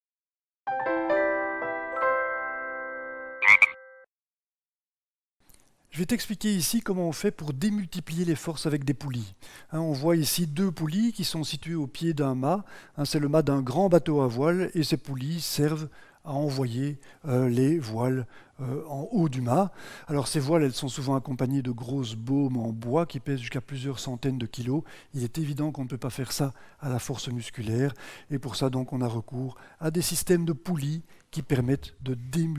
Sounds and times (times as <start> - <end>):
Music: 0.7 - 4.0
Speech: 5.9 - 32.5.